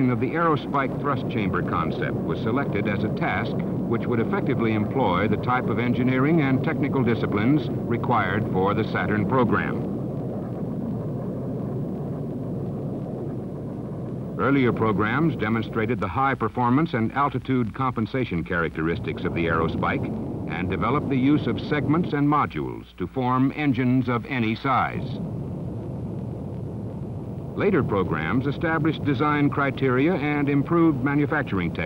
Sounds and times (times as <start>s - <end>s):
Speech: 0.0s - 9.9s, 14.4s - 25.2s, 27.6s - 31.8s.